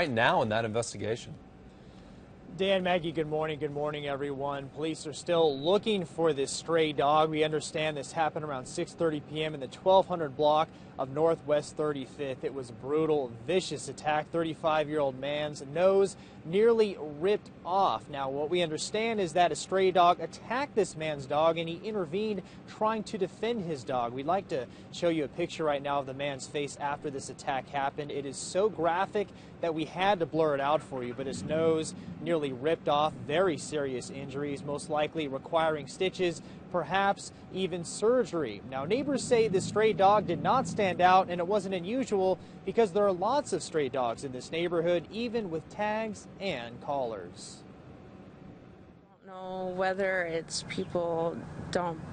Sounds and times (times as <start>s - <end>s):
Speech: 0.0s - 1.4s, 2.5s - 47.6s, 49.3s - 52.1s.